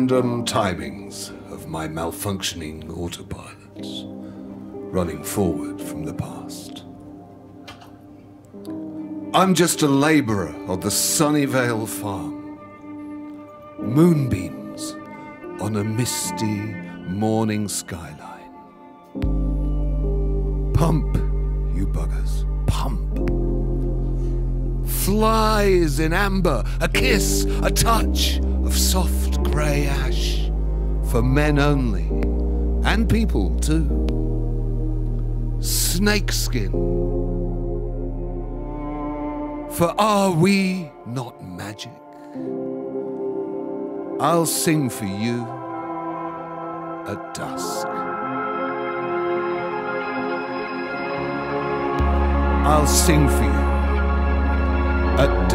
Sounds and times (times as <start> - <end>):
Speech: 0.0 - 4.1, 4.9 - 6.9, 9.4 - 12.4, 13.8 - 15.0, 15.6 - 18.5, 20.7 - 23.2, 24.9 - 30.5, 31.1 - 32.2, 32.8 - 34.0, 35.6 - 36.8, 39.7 - 42.0, 44.2 - 45.6, 47.1 - 48.0, 52.6 - 53.8, 55.2 - 55.5
Music: 0.0 - 55.5.